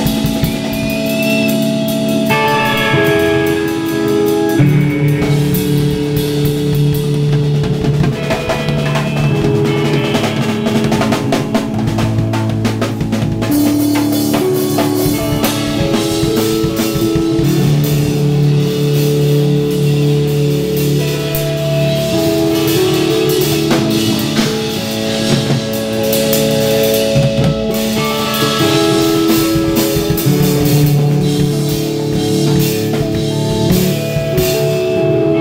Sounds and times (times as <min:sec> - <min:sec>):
Drum roll: 0:00.0 - 0:35.0
Drum kit: 0:00.0 - 0:35.4
Bass drum: 0:04.6 - 0:34.9.